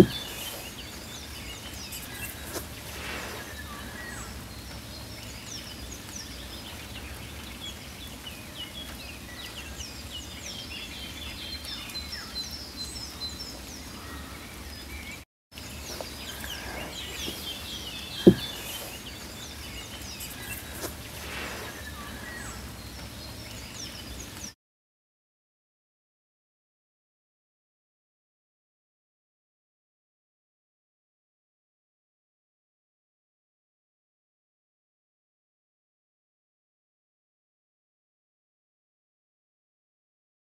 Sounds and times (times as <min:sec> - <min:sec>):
Insect: 0:15.6 - 0:24.5.